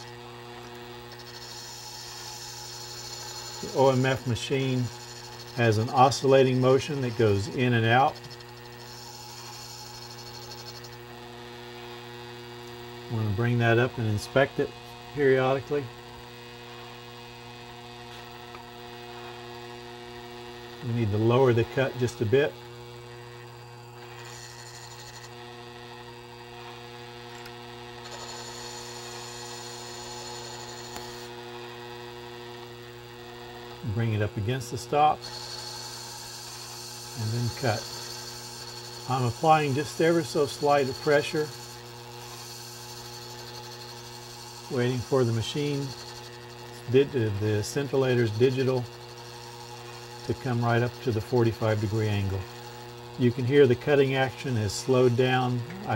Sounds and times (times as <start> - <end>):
Speech: 3.6 - 4.9, 5.6 - 8.2, 13.1 - 15.9, 20.8 - 22.6, 33.8 - 35.2, 37.2 - 37.9, 39.1 - 41.5, 44.7 - 46.0, 46.9 - 48.9, 50.3 - 52.5, 53.2 - 55.9.